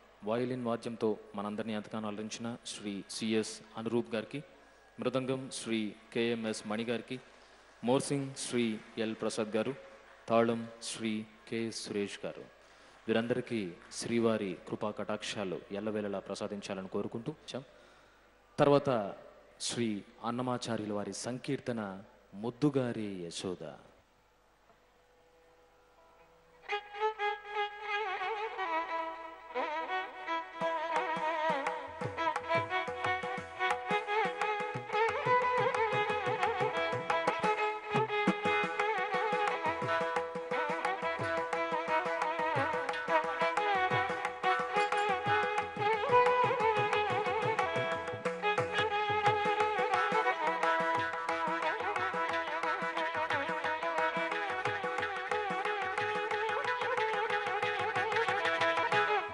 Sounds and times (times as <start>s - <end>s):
Musical instrument: 30.6s - 59.3s.